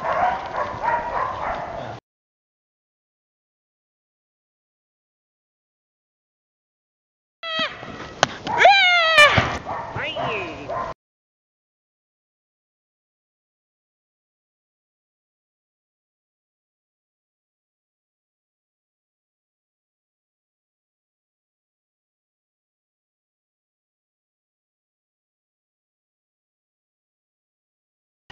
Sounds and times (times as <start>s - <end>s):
Bow-wow: 0.0s - 2.0s, 9.6s - 11.0s.